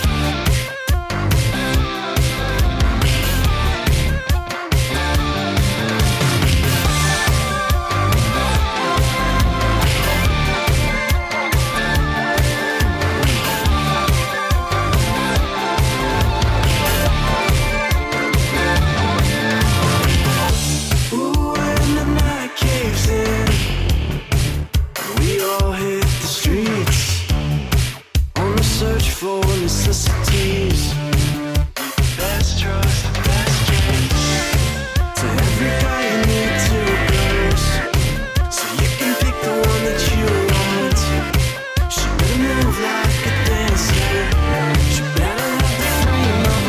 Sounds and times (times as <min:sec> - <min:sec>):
Music: 0:00.0 - 0:46.6.